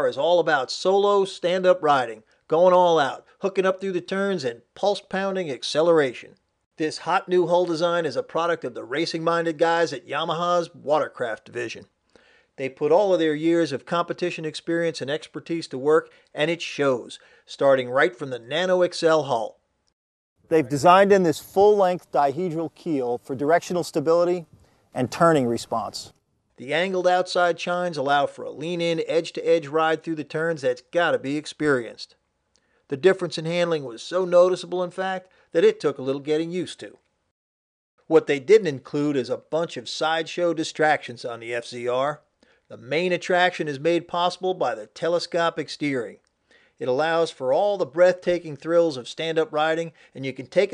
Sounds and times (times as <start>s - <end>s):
Speech: 0.0s - 11.9s, 12.6s - 19.6s, 20.5s - 32.2s, 32.9s - 37.0s, 38.1s - 46.2s, 46.8s - 50.7s.